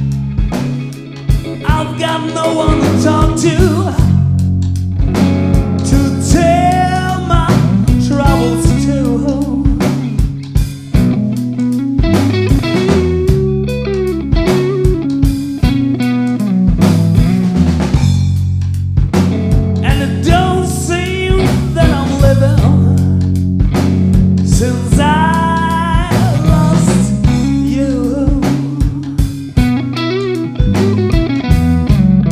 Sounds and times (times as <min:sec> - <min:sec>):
Bass drum: 0:00.0 - 0:32.3
Drum kit: 0:00.0 - 0:32.3
Guitar: 0:00.0 - 0:32.3.